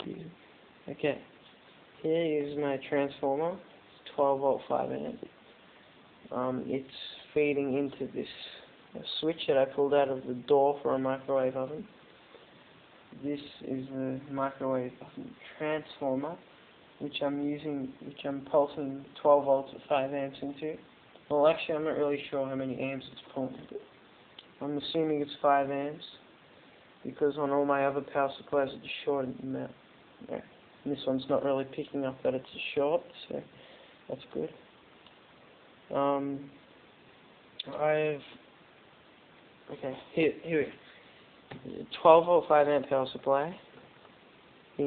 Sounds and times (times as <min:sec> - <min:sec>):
Speech: 0:00.0 - 0:01.4, 0:02.0 - 0:05.4, 0:06.3 - 0:12.0, 0:13.1 - 0:26.3, 0:27.0 - 0:34.6, 0:35.9 - 0:36.6, 0:37.6 - 0:38.4, 0:39.7 - 0:40.9, 0:41.6 - 0:43.8.